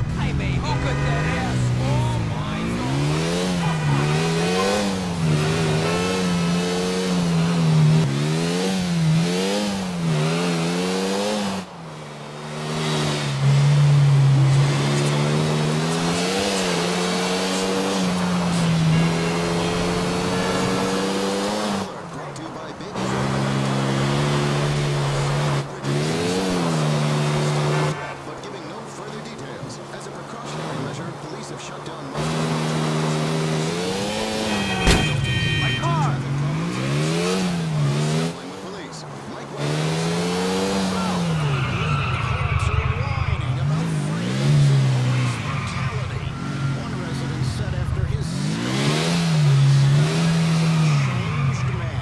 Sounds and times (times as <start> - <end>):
Speech: 0.0 - 3.0, 14.5 - 20.7, 21.7 - 23.4, 27.2 - 32.3, 35.6 - 36.9, 38.2 - 40.0, 40.7 - 48.6, 50.0 - 52.0.